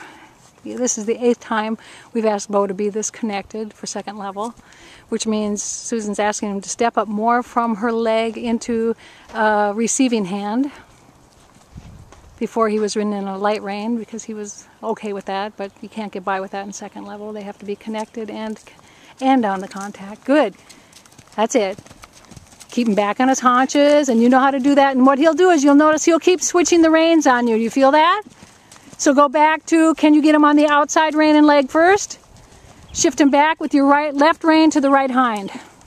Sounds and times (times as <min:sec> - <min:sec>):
Speech: 0:00.6 - 0:10.8, 0:12.4 - 0:20.6, 0:21.4 - 0:21.8, 0:22.7 - 0:28.3, 0:29.0 - 0:32.2, 0:33.0 - 0:35.6.